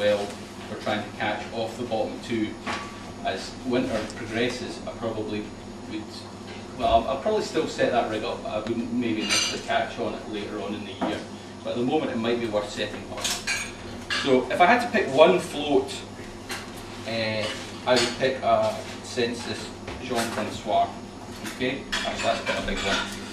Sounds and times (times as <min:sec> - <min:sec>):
Speech: 0:00.0 - 0:02.6, 0:03.2 - 0:13.5, 0:14.2 - 0:16.1, 0:17.1 - 0:23.1.